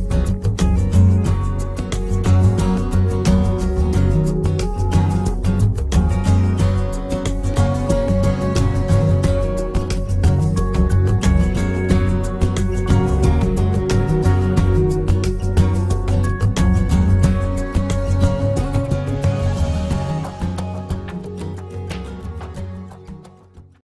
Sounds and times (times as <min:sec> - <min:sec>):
Music: 0:00.0 - 0:23.8.